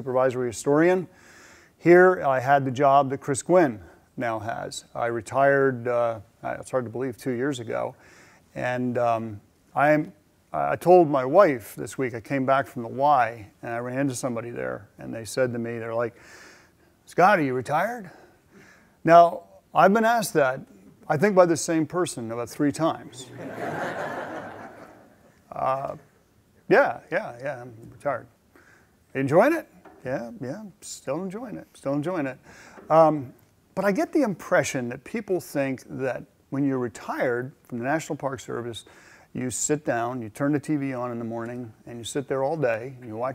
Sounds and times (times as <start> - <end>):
Speech: 0.0 - 1.1, 1.8 - 8.0, 8.6 - 16.2, 17.1 - 18.2, 19.0 - 23.6, 25.5 - 26.1, 26.7 - 28.3, 29.1 - 43.3.